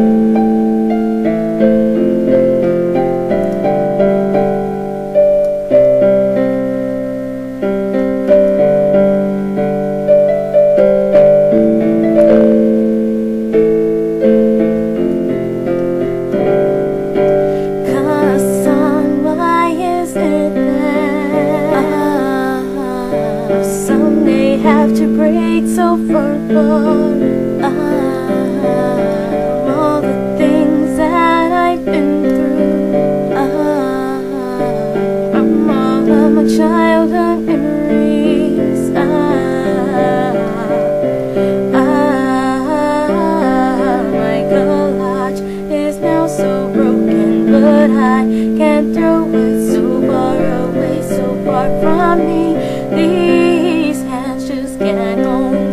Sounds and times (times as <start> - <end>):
Music: 0.0 - 55.7
Female singing: 17.8 - 55.7.